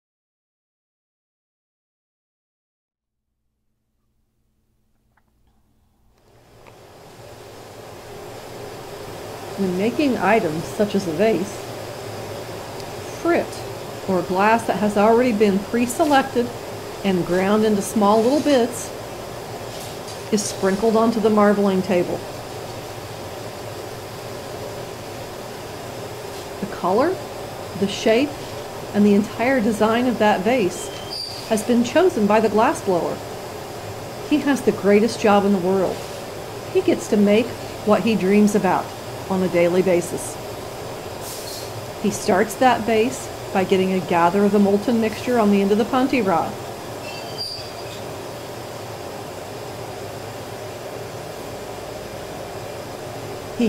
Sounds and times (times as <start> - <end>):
Speech: 9.6 - 11.6, 13.1 - 18.9, 20.3 - 22.2, 26.6 - 27.2, 27.8 - 28.4, 29.0 - 30.9, 31.5 - 33.2, 34.3 - 36.0, 36.7 - 40.4, 42.0 - 46.6.